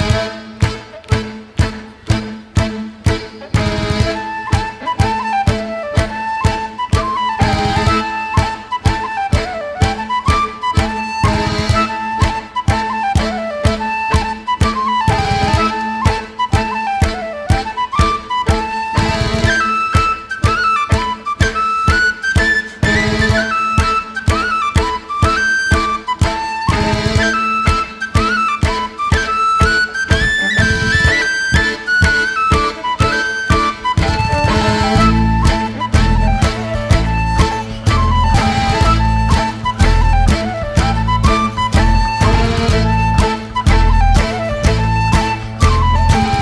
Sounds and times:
Music: 0:00.0 - 0:46.4.

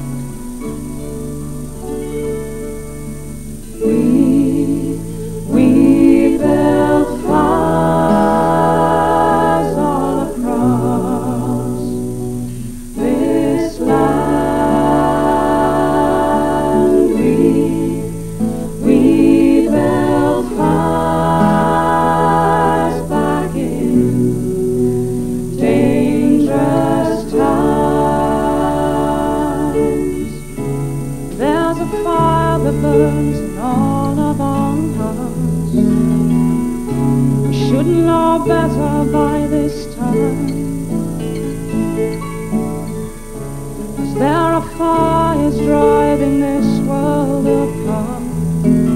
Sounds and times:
Singing: 0:03.8 - 0:35.8, 0:37.5 - 0:41.0, 0:44.0 - 0:48.9.

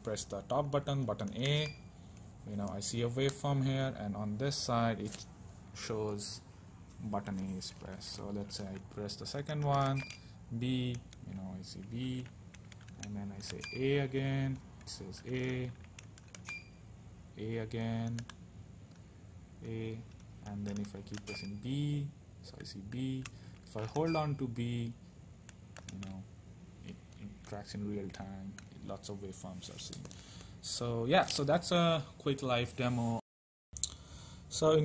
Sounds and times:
Speech: 0:00.0 - 0:01.8, 0:02.4 - 0:12.3, 0:13.0 - 0:15.8, 0:17.4 - 0:18.3, 0:19.6 - 0:25.0, 0:25.9 - 0:33.2, 0:34.5 - 0:34.8
Inside, small room: 0:00.0 - 0:33.2, 0:33.8 - 0:34.8
Beep, bleep: 0:21.3 - 0:21.7, 0:24.0 - 0:24.4.

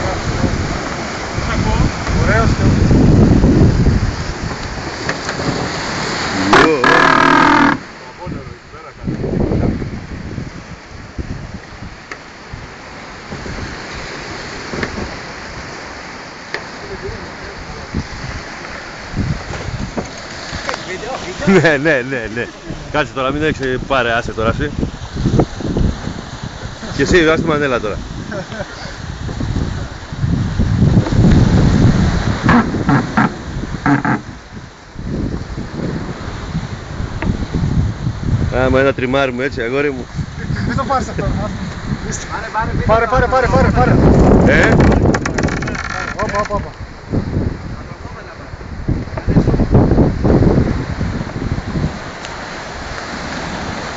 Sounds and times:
Speech: 0:08.1 - 0:09.2, 0:20.8 - 0:24.8, 0:27.0 - 0:28.0, 0:38.5 - 0:44.8, 0:46.0 - 0:46.8, 0:47.8 - 0:48.6.

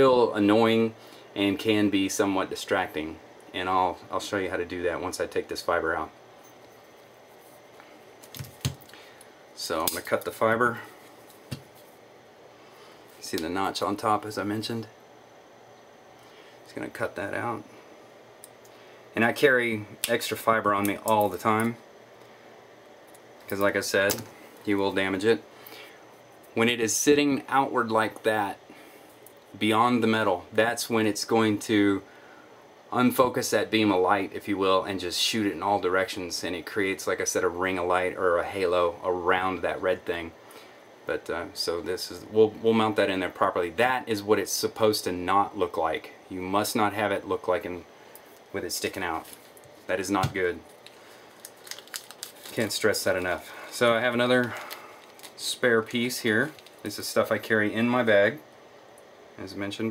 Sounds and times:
Speech: 0:00.0 - 0:06.2, 0:09.6 - 0:11.0, 0:13.2 - 0:15.0, 0:16.7 - 0:17.7, 0:19.2 - 0:21.8, 0:23.5 - 0:25.5, 0:26.6 - 0:28.6, 0:29.5 - 0:32.1, 0:32.9 - 0:40.4, 0:41.1 - 0:47.9, 0:48.5 - 0:49.3, 0:49.9 - 0:50.6, 0:52.5 - 0:54.7, 0:55.4 - 0:58.5, 0:59.4 - 0:59.9.

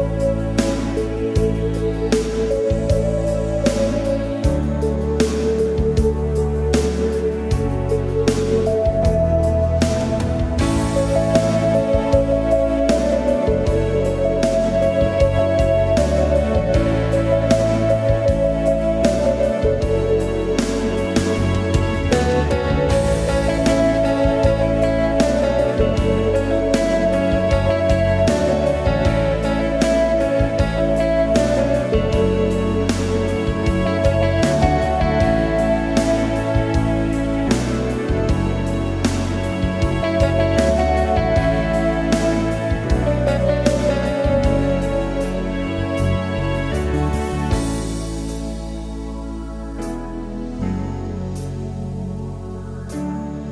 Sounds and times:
Piano: 0:00.0 - 0:53.5.

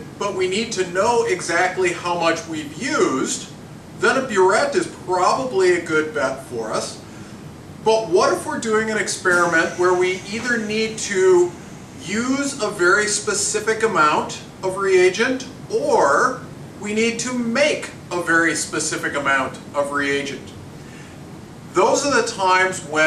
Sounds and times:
Speech: 0:00.0 - 0:07.0, 0:07.8 - 0:20.6, 0:21.7 - 0:23.0.

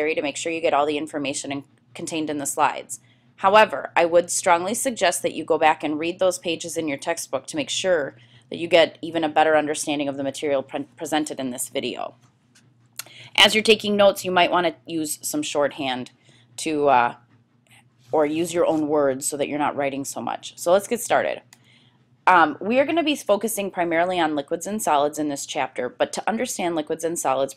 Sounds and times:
Speech: 0:00.0 - 0:12.1, 0:13.0 - 0:17.2, 0:18.2 - 0:21.5, 0:22.3 - 0:27.5.

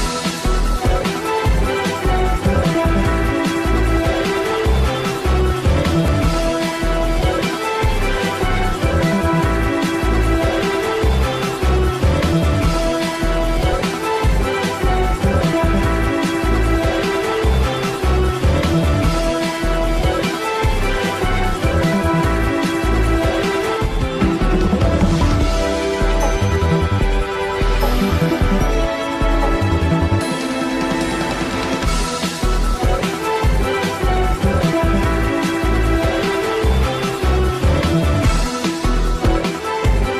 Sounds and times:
Dance music: 0:00.0 - 0:40.1
Theme music: 0:00.0 - 0:40.1.

